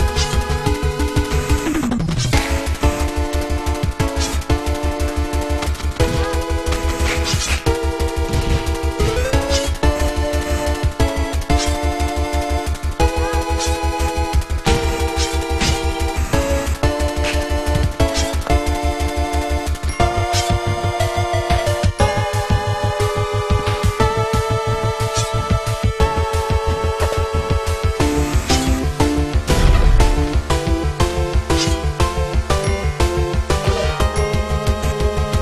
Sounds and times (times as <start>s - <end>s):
Video game music: 0.0s - 35.4s.